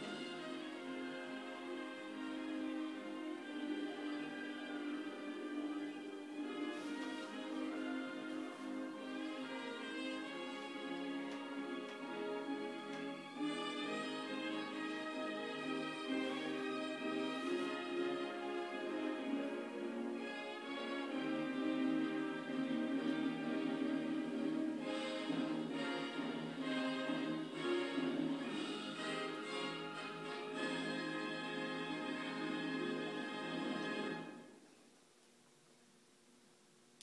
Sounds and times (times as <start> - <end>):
Violin, fiddle: 0.0 - 34.4
String section: 0.0 - 34.7.